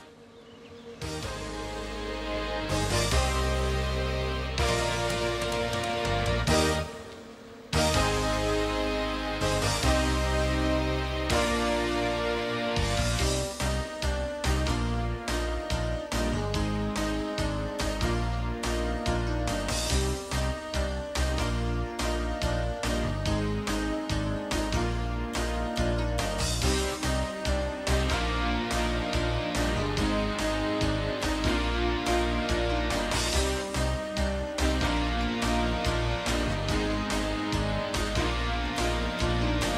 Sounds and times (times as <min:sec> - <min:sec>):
Music: 0:00.0 - 0:39.7.